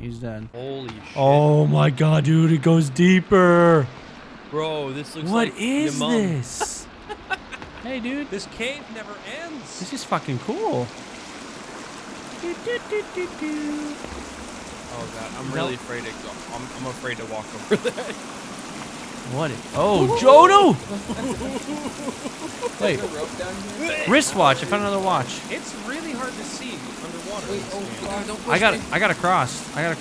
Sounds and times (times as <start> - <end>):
Trickle, dribble: 7.6 - 30.0.